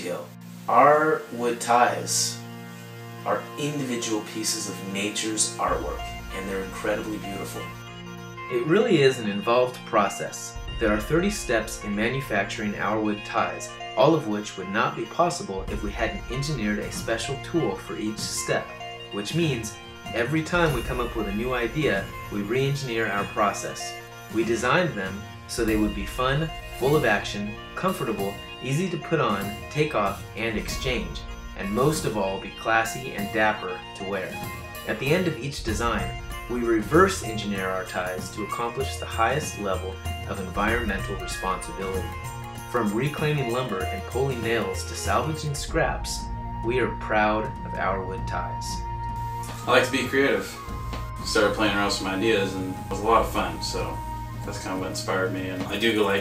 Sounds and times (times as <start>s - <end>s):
Speech: 0.0s - 2.4s, 3.2s - 7.8s, 8.5s - 48.8s, 49.7s - 50.6s, 51.2s - 56.2s
Music: 0.0s - 56.2s.